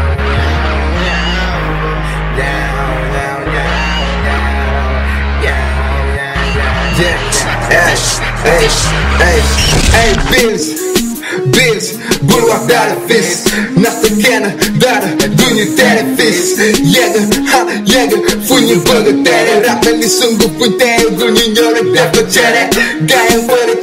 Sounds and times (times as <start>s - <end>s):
Music: 0.0s - 23.8s.